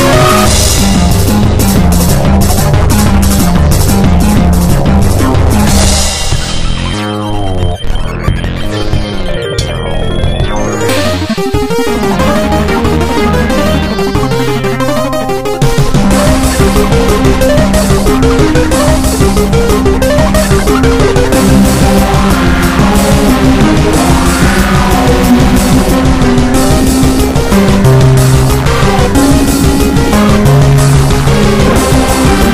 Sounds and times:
Techno: 0:00.0 - 0:32.5.

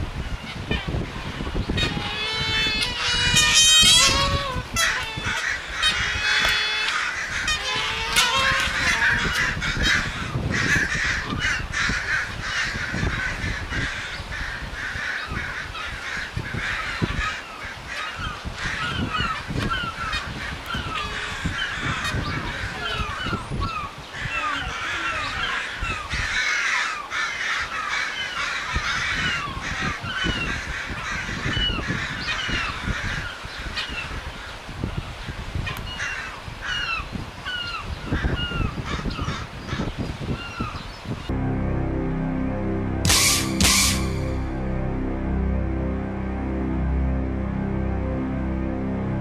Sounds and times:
Honk: 0:01.8 - 0:34.1, 0:43.1 - 0:44.2.

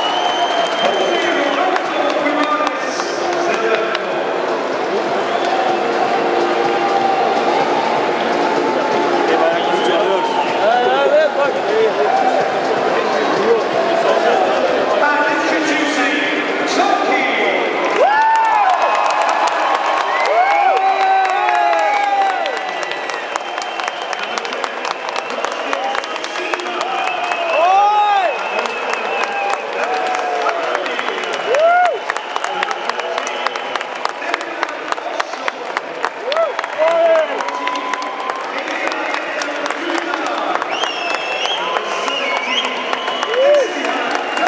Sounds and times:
Music: 0:00.0 - 0:44.4
Speech: 0:00.8 - 0:04.3, 0:09.3 - 0:17.8, 0:25.4 - 0:27.0, 0:34.2 - 0:35.9, 0:36.8 - 0:40.7, 0:41.6 - 0:44.4.

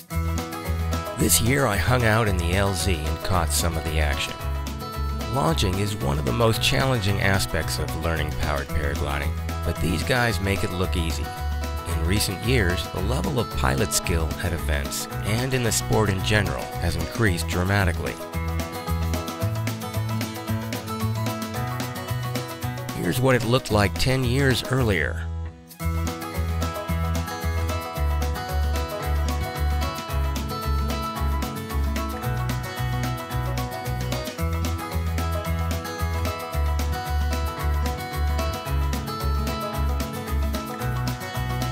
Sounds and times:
Music: 0:00.0 - 0:41.7
Speech: 0:01.2 - 0:04.4, 0:05.2 - 0:18.3, 0:23.0 - 0:25.3.

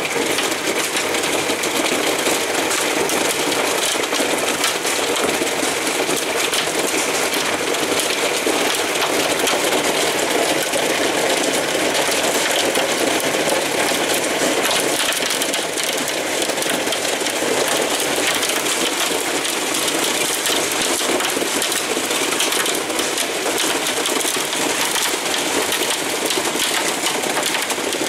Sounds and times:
Rain: 0:00.0 - 0:28.0.

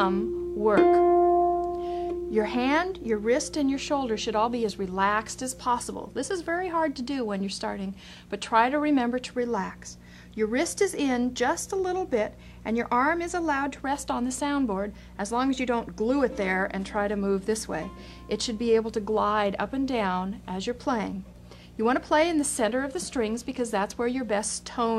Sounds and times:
Speech: 0:00.0 - 0:01.0, 0:02.4 - 0:24.9.

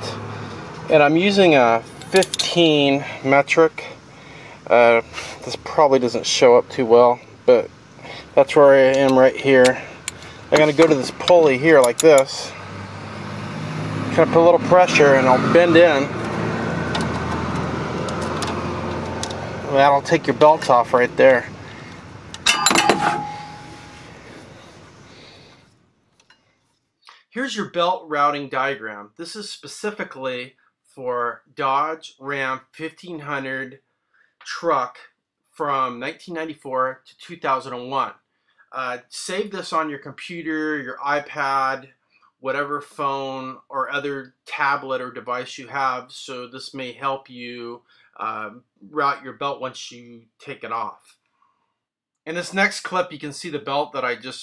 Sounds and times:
Speech: 0:00.0 - 0:00.2, 0:00.9 - 0:04.0, 0:04.7 - 0:07.7, 0:08.3 - 0:09.9, 0:10.5 - 0:12.6, 0:14.1 - 0:16.2, 0:19.7 - 0:21.6, 0:27.1 - 0:33.8, 0:34.4 - 0:51.1, 0:52.3 - 0:54.4
Vehicle: 0:00.0 - 0:26.6.

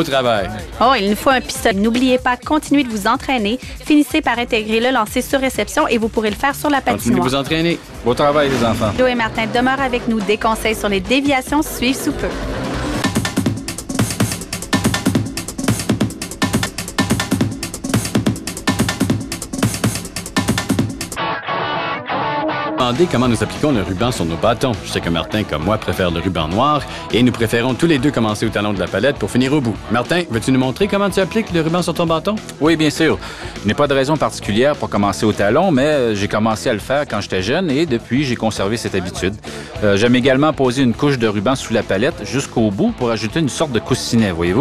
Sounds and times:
Speech: 0:00.0 - 0:12.4, 0:22.8 - 0:44.6
Music: 0:00.0 - 0:44.6.

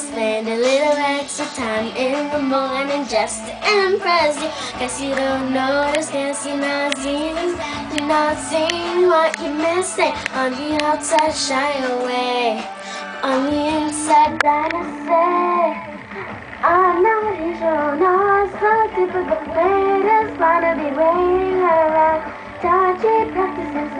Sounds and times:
Child singing: 0:00.0 - 0:15.9, 0:16.6 - 0:23.9
Female singing: 0:00.0 - 0:16.0, 0:16.6 - 0:23.9
Music: 0:00.0 - 0:23.9.

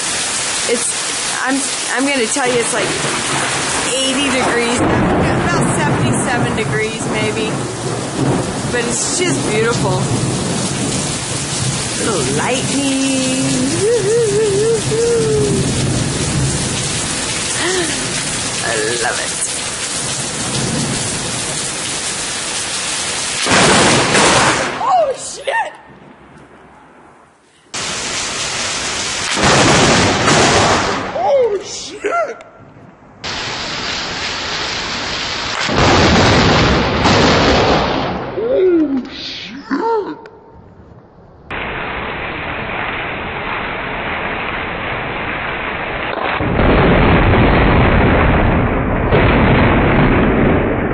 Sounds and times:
Thunderstorm: 0:00.0 - 0:24.9, 0:27.8 - 0:31.3, 0:32.8 - 0:38.6, 0:40.5 - 0:50.9
Speech: 0:00.7 - 0:03.0, 0:03.9 - 0:07.6, 0:08.8 - 0:10.1, 0:12.0 - 0:14.3, 0:18.6 - 0:19.5, 0:24.8 - 0:25.8, 0:31.2 - 0:32.4, 0:38.4 - 0:40.2.

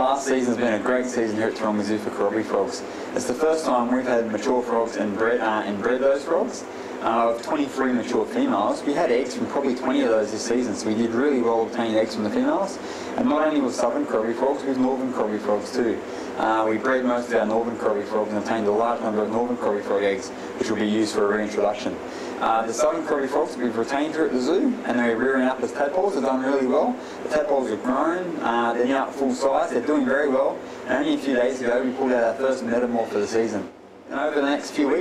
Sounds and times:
Speech: 0:00.0 - 0:35.0.

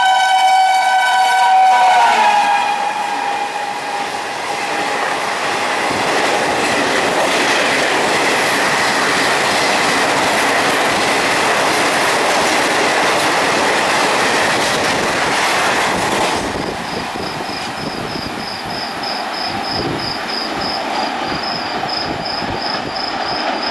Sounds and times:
Train: 0:00.0 - 0:23.7.

